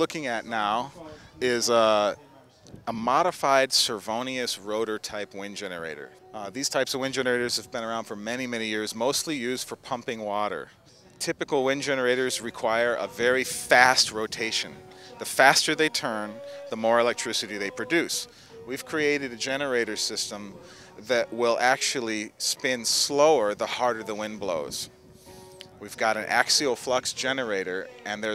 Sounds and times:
Speech: 0:00.0 - 0:24.9, 0:25.8 - 0:28.3
Music: 0:00.0 - 0:28.3.

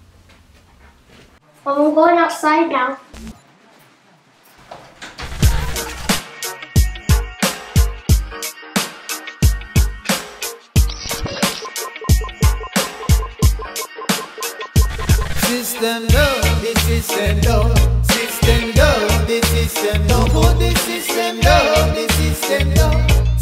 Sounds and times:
Music: 0:05.4 - 0:23.4.

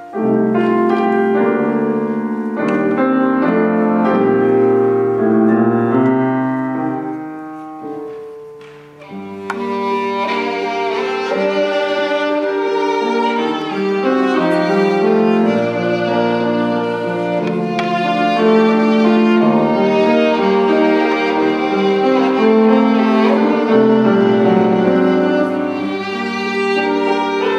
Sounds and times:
Violin, fiddle: 0:09.0 - 0:27.5.

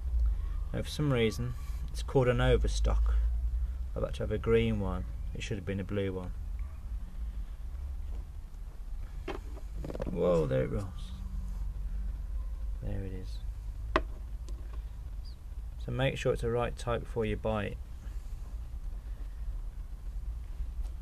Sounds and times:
Speech: 0:00.7 - 0:03.2, 0:04.0 - 0:06.4, 0:10.1 - 0:11.2, 0:12.8 - 0:13.5, 0:15.8 - 0:17.8.

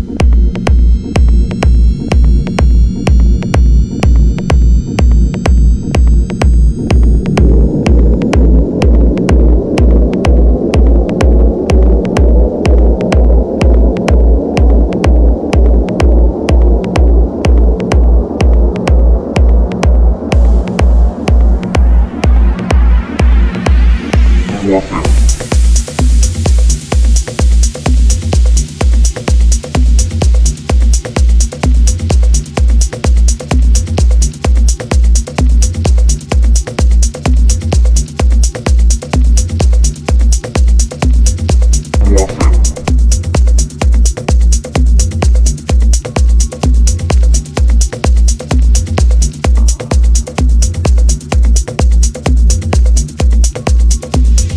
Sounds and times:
House music: 0:00.0 - 0:54.5
Techno: 0:00.0 - 0:54.5
Trance music: 0:00.0 - 0:54.5.

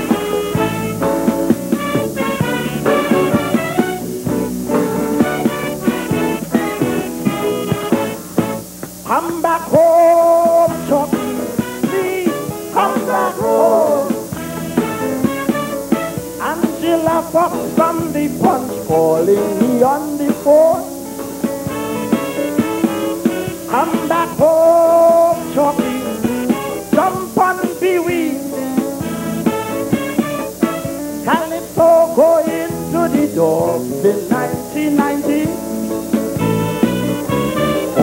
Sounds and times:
Music: 0:00.0 - 0:38.0.

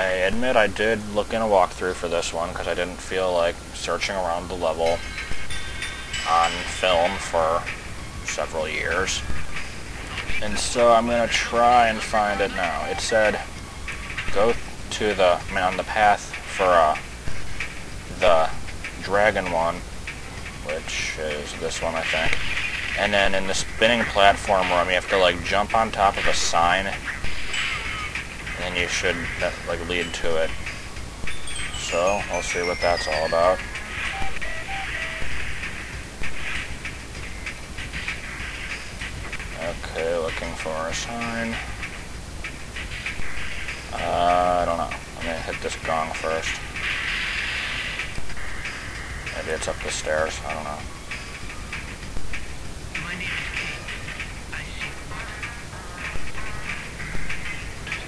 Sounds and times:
Speech: 0:00.0 - 0:05.0, 0:06.3 - 0:07.7, 0:08.3 - 0:09.3, 0:10.4 - 0:13.5, 0:14.3 - 0:17.0, 0:18.1 - 0:19.8, 0:20.7 - 0:22.3, 0:23.0 - 0:27.0, 0:28.6 - 0:30.6, 0:31.8 - 0:33.6, 0:39.6 - 0:41.6, 0:43.9 - 0:46.6, 0:49.3 - 0:50.8, 0:53.0 - 0:53.9.

